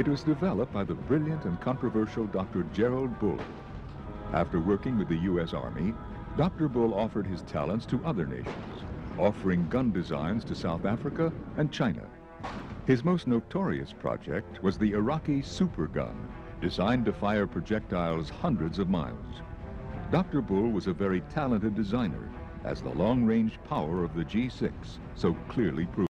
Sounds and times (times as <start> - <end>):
Speech: 0.0 - 3.4, 4.3 - 12.2, 12.9 - 19.4, 20.1 - 26.1
Music: 0.0 - 26.1.